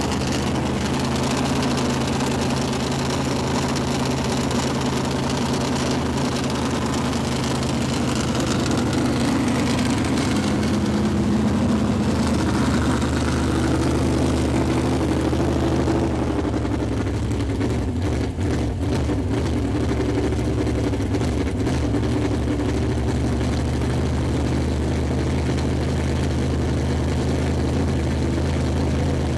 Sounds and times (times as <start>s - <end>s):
Car: 0.0s - 29.3s
Medium engine (mid frequency): 0.0s - 29.3s.